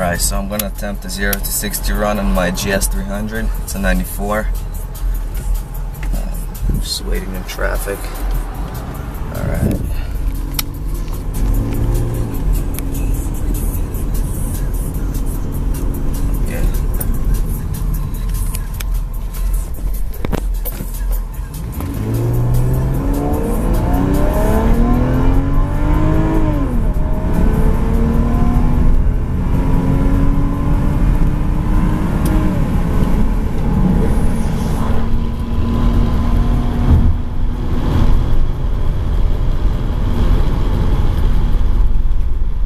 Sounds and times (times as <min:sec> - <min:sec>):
Car: 0:00.0 - 0:42.6
Medium engine (mid frequency): 0:00.0 - 0:42.6
Accelerating, revving, vroom: 0:10.5 - 0:13.6, 0:21.6 - 0:41.6.